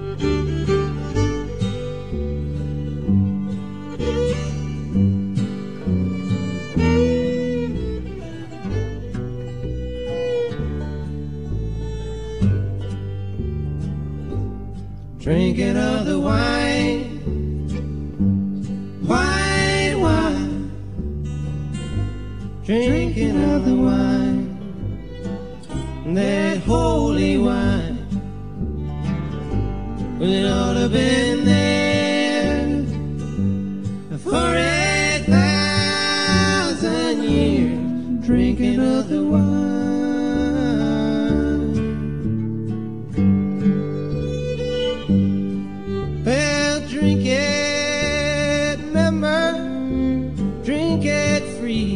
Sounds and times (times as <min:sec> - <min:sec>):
Music: 0:00.0 - 0:51.9.